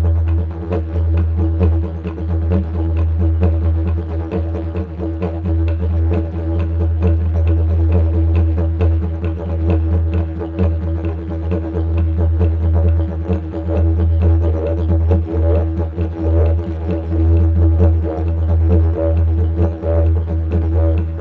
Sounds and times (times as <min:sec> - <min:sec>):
Didgeridoo: 0:00.0 - 0:21.2.